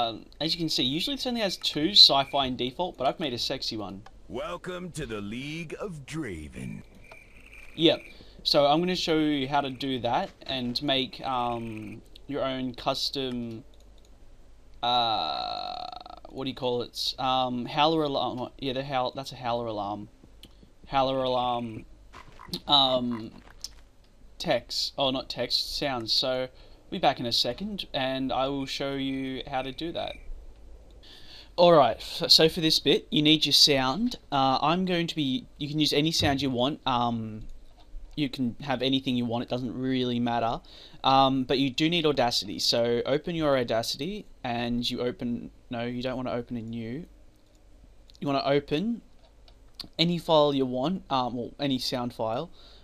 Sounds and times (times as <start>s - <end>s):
Speech: 0.0s - 6.9s, 7.8s - 13.6s, 14.8s - 20.1s, 20.9s - 21.9s, 22.6s - 23.4s, 24.4s - 30.2s, 31.6s - 37.5s, 38.2s - 47.1s, 48.2s - 49.1s, 49.8s - 52.5s.